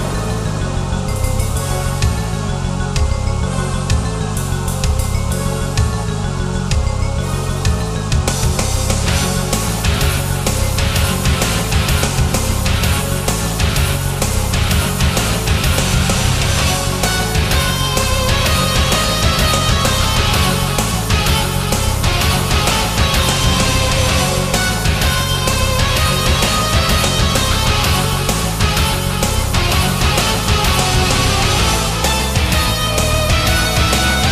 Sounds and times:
Music: 0.0s - 34.3s.

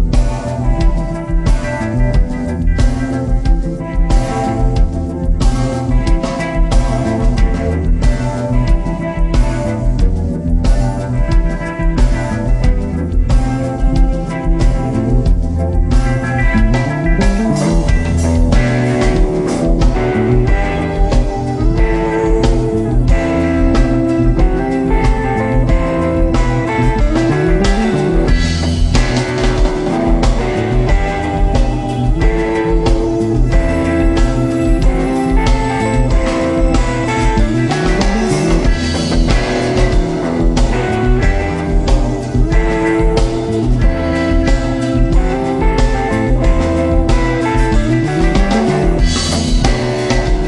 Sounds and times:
Blues: 0.0s - 50.4s.

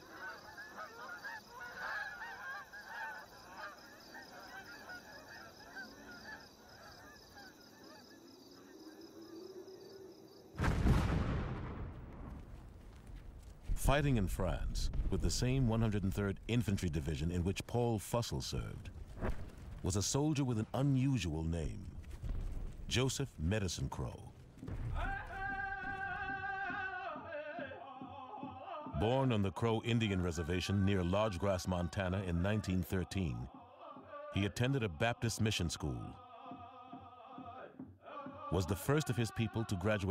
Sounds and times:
Speech: 13.8s - 18.9s, 19.8s - 21.9s, 22.9s - 24.3s, 29.0s - 33.5s, 34.4s - 36.2s, 38.6s - 40.1s
Music: 25.0s - 30.7s.

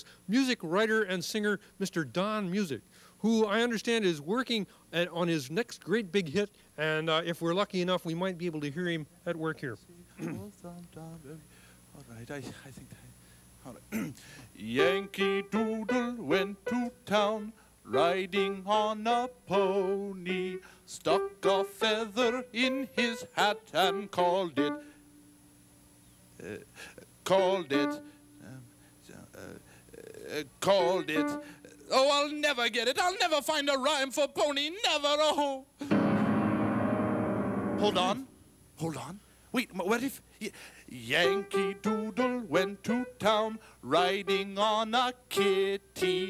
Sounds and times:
Music: 14.8s - 25.4s, 27.7s - 28.5s, 30.7s - 31.6s, 35.8s - 38.4s, 41.2s - 46.2s.

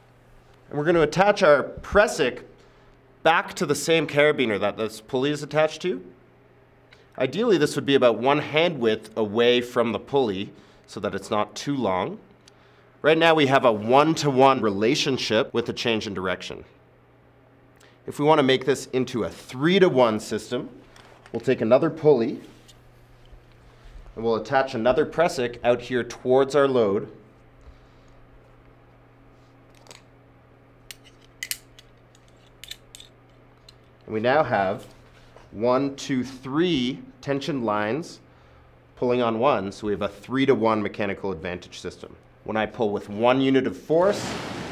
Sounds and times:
Speech: 0.7s - 2.6s, 3.2s - 6.2s, 7.2s - 12.3s, 13.0s - 16.8s, 18.1s - 20.8s, 21.4s - 22.5s, 24.2s - 27.2s, 34.1s - 34.9s, 35.5s - 38.2s, 39.0s - 44.3s.

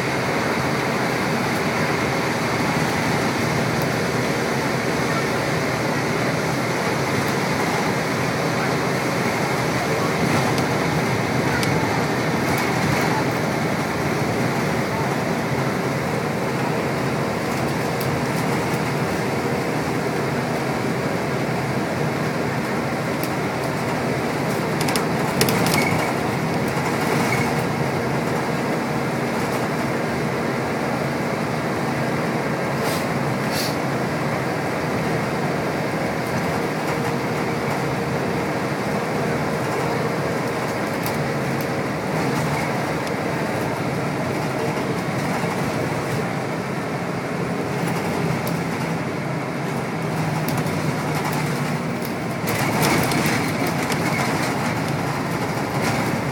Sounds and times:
Vehicle: 0.0s - 56.3s
Speech: 7.4s - 13.5s.

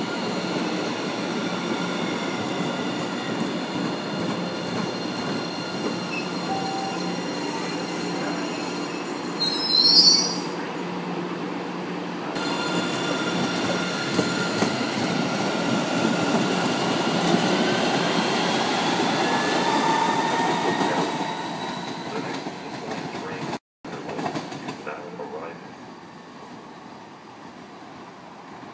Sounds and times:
Speech: 23.1s - 24.2s, 24.8s - 25.6s.

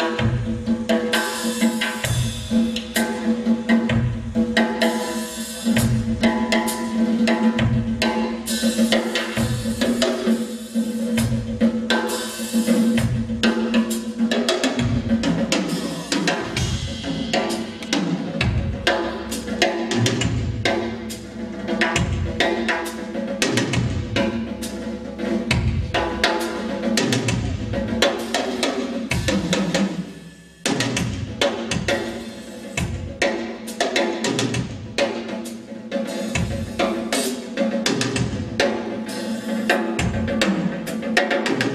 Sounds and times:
Cymbal: 0.0s - 41.7s
Drum kit: 0.0s - 41.7s.

